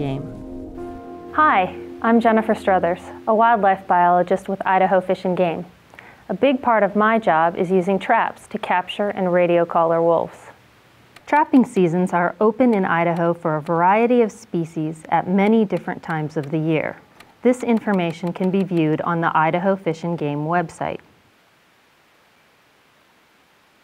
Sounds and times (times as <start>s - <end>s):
Speech: 0.0s - 0.3s, 1.4s - 5.7s, 6.3s - 10.6s, 11.3s - 21.1s.